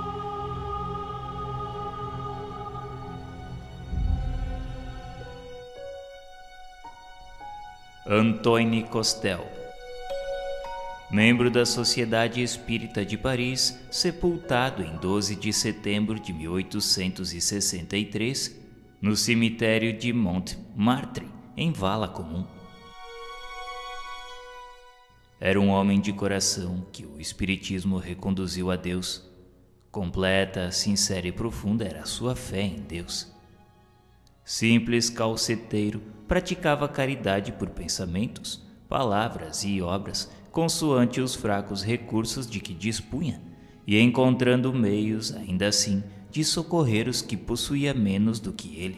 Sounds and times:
Music: 0.0 - 48.9
Speech: 8.1 - 9.6, 11.1 - 22.6, 25.4 - 29.3, 29.9 - 33.3, 34.4 - 48.9.

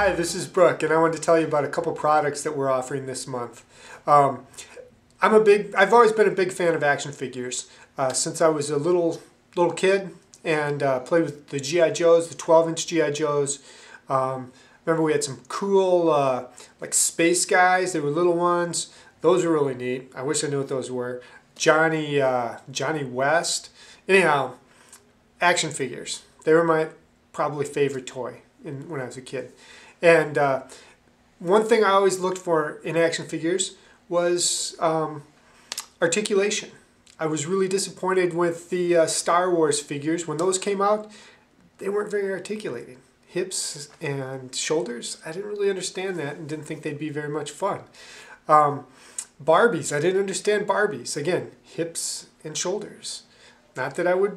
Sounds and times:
Speech: 0.0 - 24.6, 25.4 - 30.7, 31.4 - 35.3, 36.0 - 41.2, 41.8 - 54.3.

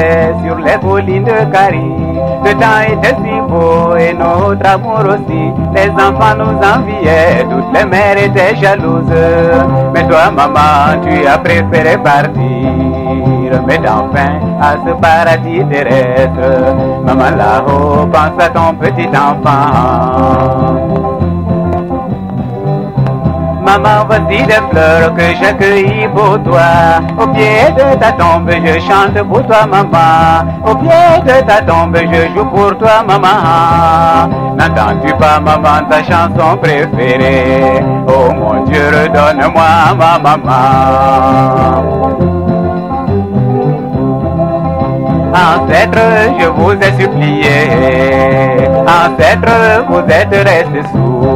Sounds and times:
Music: 0.0 - 51.3.

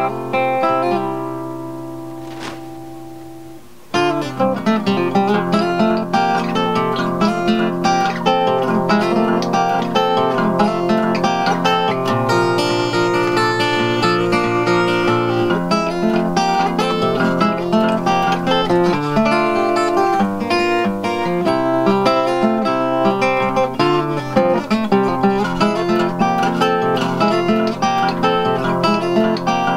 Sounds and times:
Music: 0.0 - 29.7.

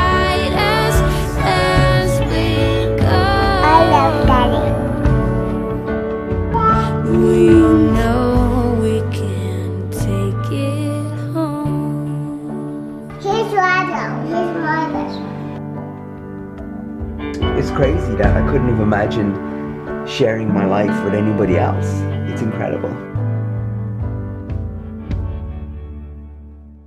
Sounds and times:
Music: 0.0 - 26.8
Speech: 3.6 - 4.8, 6.6 - 8.5, 17.6 - 19.4, 20.1 - 23.0.

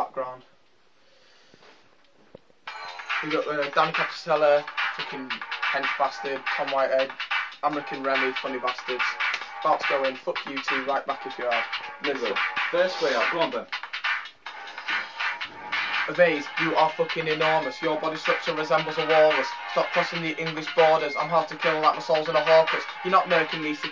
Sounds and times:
Speech: 0.0 - 0.5, 3.2 - 13.7, 16.1 - 23.9
Music: 2.4 - 23.9.

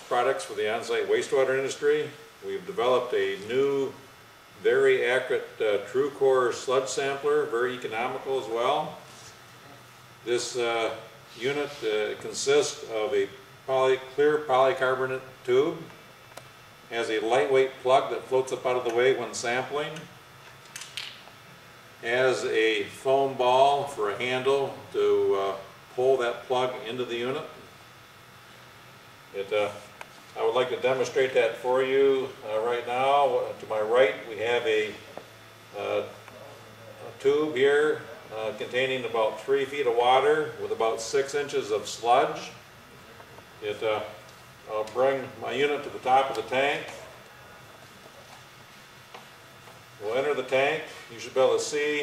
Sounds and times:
Speech: 0.0 - 4.0, 4.6 - 9.0, 10.2 - 16.0, 16.9 - 20.1, 22.0 - 27.7, 29.3 - 29.8, 30.4 - 42.6, 43.6 - 47.2, 50.0 - 52.0.

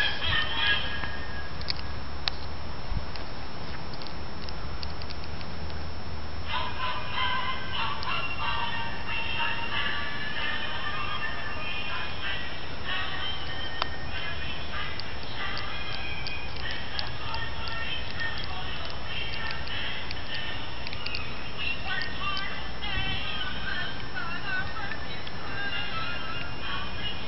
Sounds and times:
Christmas music: 0.0 - 2.1, 6.4 - 27.2.

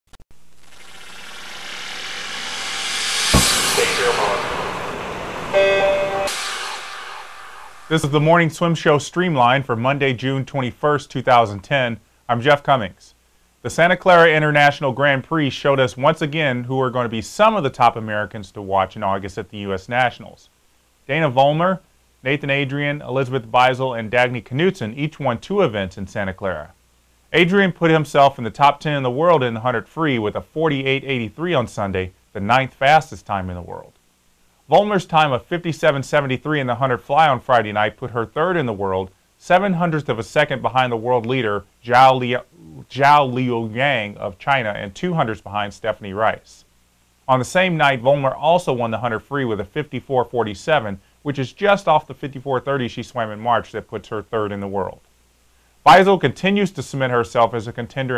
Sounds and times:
Music: 2.6 - 8.2
Speech: 3.6 - 4.6, 7.9 - 20.5, 21.1 - 34.0, 34.7 - 46.7, 47.3 - 55.0, 55.9 - 58.1.

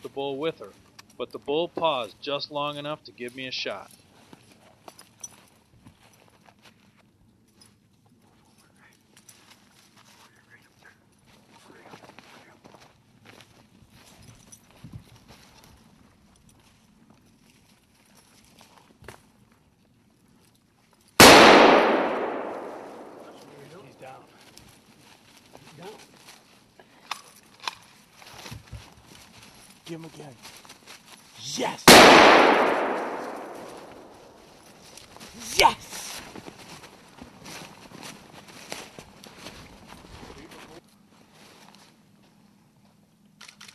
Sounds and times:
Speech: 0.0 - 3.9, 23.3 - 24.4, 29.9 - 30.4, 31.4 - 31.9, 35.4 - 36.2, 40.2 - 40.8
Outside, rural or natural: 0.0 - 43.7.

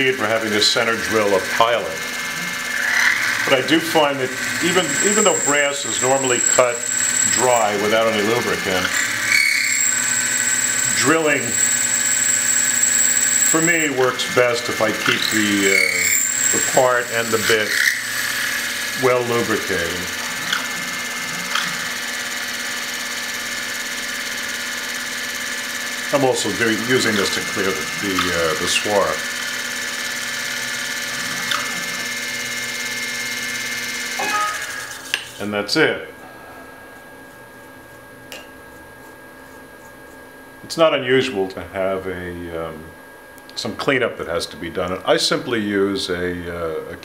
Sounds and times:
Speech: 0.0 - 2.1, 3.5 - 9.0, 10.9 - 11.6, 13.6 - 17.8, 19.0 - 20.1, 26.1 - 29.3, 35.4 - 36.2, 40.6 - 47.0.

